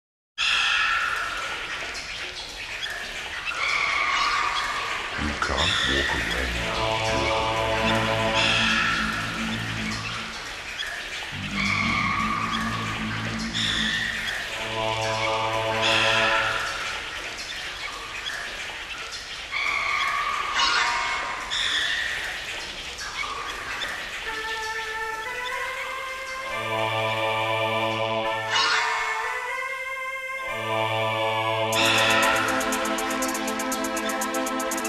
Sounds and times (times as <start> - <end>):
Electronic music: 5.2 - 10.7, 11.4 - 16.7, 30.5 - 34.8.